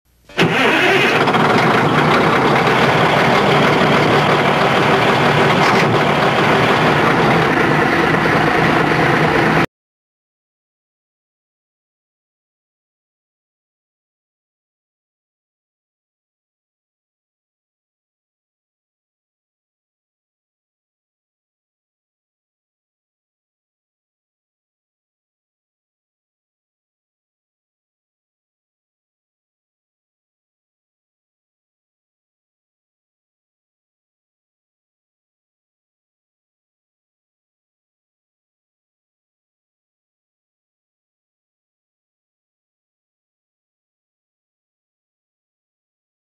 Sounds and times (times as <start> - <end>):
Vehicle: 0.3 - 9.7.